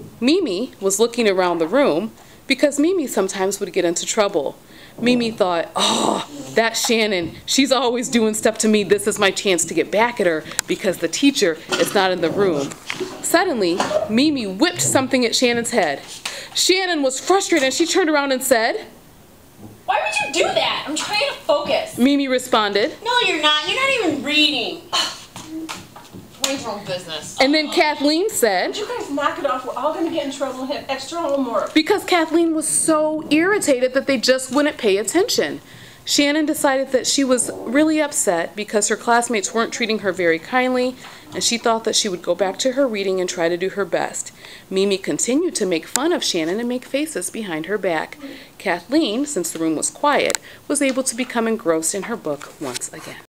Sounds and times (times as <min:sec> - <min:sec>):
Narration, monologue: 0:00.0 - 0:53.2.